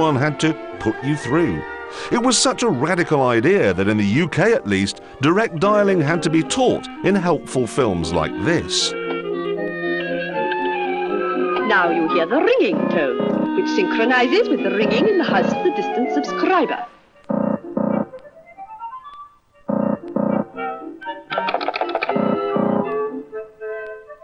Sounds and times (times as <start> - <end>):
Speech: 0.0 - 8.9, 11.6 - 16.9
Music: 0.0 - 24.2.